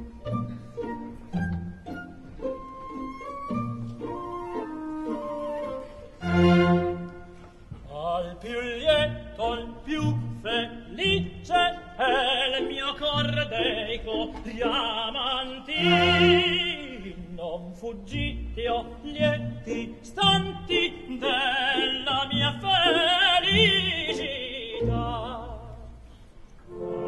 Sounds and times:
Opera: 0:00.0 - 0:27.0.

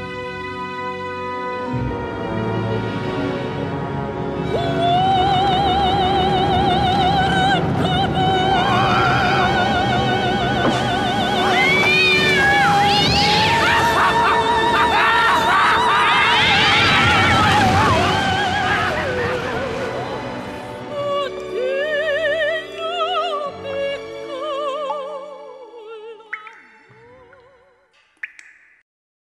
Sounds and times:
Music: 0:00.0 - 0:28.2.

